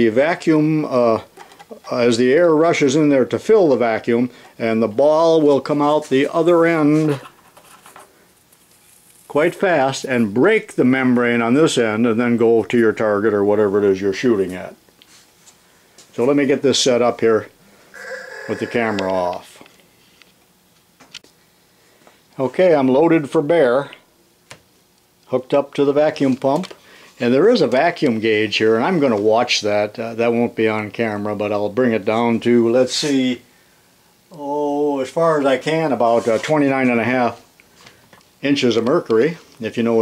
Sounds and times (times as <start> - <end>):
Speech: 0.0 - 7.3, 9.3 - 14.8, 16.2 - 17.6, 18.4 - 19.6, 22.4 - 24.0, 25.3 - 33.4, 34.3 - 37.5, 38.4 - 40.0
Inside, small room: 0.0 - 40.0.